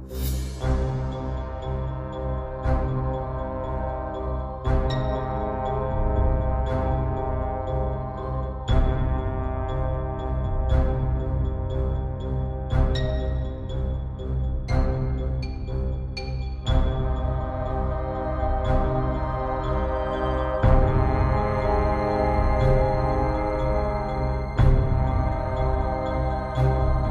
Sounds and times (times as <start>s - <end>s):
Music: 0.0s - 27.1s.